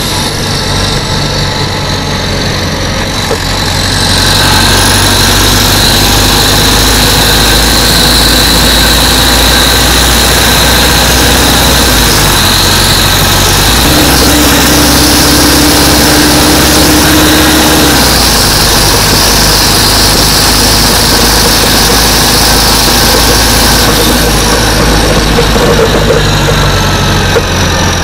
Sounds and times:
Vehicle: 0.0s - 28.0s.

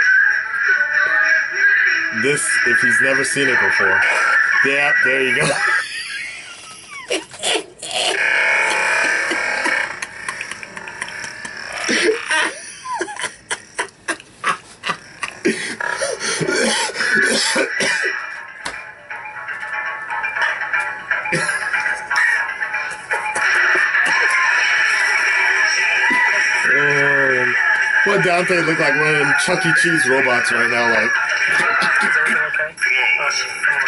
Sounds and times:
Inside, small room: 0.0s - 33.8s
Laughter: 5.4s - 7.7s, 8.9s - 15.5s, 31.5s - 32.5s.

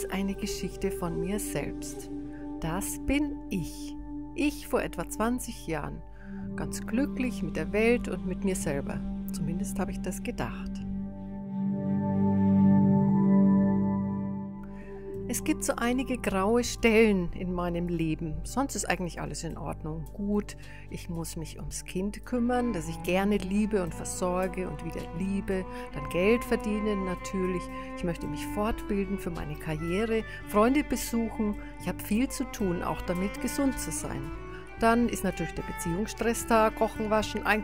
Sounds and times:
Speech: 0.0s - 6.0s, 6.6s - 10.8s, 15.3s - 37.6s
Music: 0.0s - 37.6s.

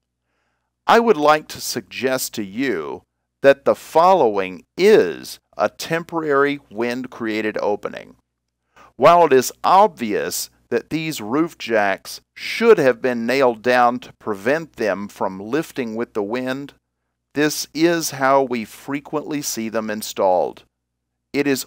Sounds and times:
Speech: 0.9s - 8.2s, 9.0s - 16.8s, 17.4s - 20.6s, 21.4s - 21.6s.

